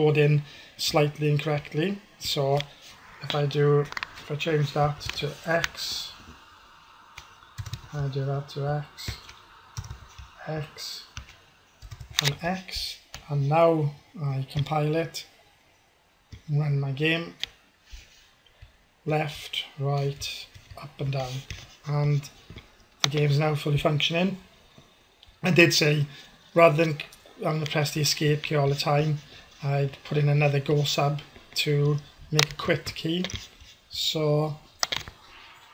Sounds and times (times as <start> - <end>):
Speech: 0.0 - 6.2, 7.9 - 9.2, 10.4 - 11.1, 12.2 - 15.3, 16.5 - 17.4, 19.1 - 22.4, 23.0 - 24.4, 25.4 - 34.7.